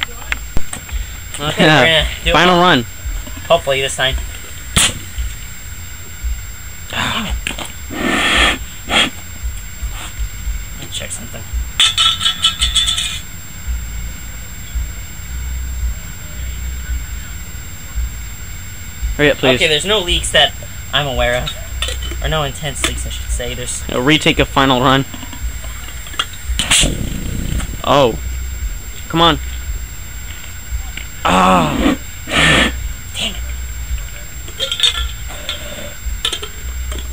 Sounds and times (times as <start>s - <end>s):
Speech: 1.4s - 2.9s, 3.5s - 4.3s, 10.8s - 11.6s, 19.2s - 25.1s, 27.8s - 28.2s, 29.1s - 29.4s.